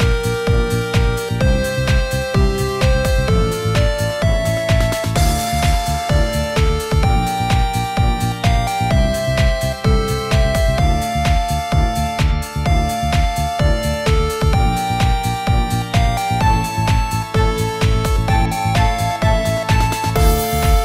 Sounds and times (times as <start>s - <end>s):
Music: 0.0s - 20.8s.